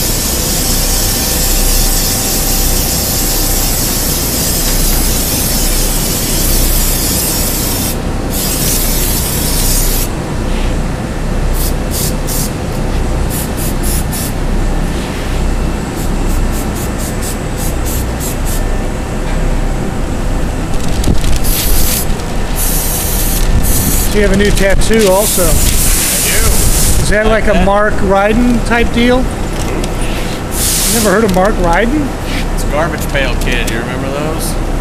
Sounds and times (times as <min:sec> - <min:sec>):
Speech: 0:24.2 - 0:29.3, 0:30.9 - 0:34.6.